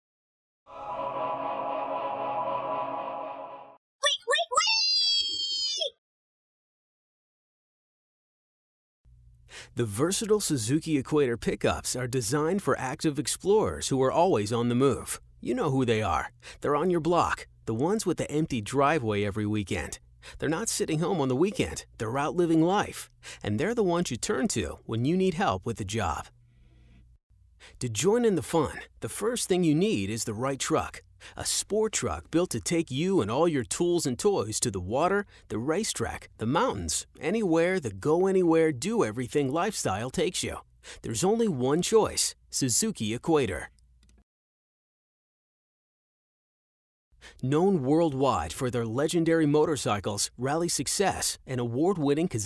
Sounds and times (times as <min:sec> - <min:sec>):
Music: 0:00.7 - 0:03.8
Speech: 0:04.0 - 0:05.9, 0:09.8 - 0:26.3, 0:27.7 - 0:43.7, 0:47.4 - 0:52.4.